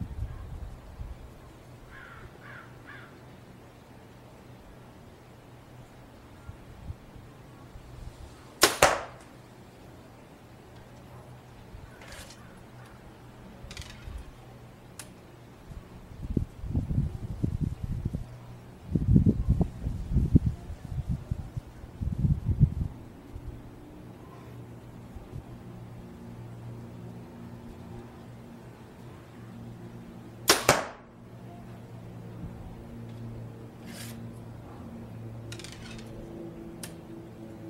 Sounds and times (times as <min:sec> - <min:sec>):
Arrow: 0:08.6 - 0:09.3, 0:30.5 - 0:31.1.